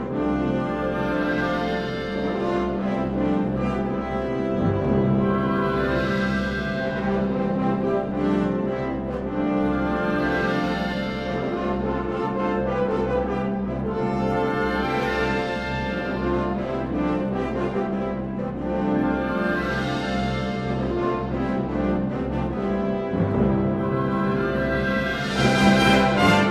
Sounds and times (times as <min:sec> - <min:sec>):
Orchestra: 0:00.0 - 0:26.5.